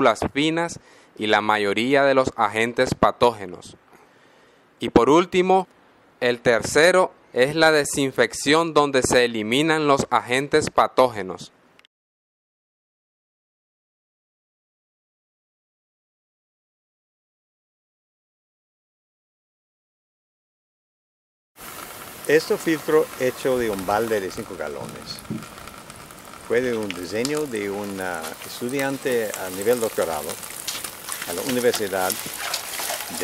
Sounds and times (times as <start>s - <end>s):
Speech: 0.0s - 3.8s, 4.8s - 11.6s, 22.3s - 25.2s, 26.5s - 30.4s, 31.3s - 32.3s
Water: 21.6s - 33.2s.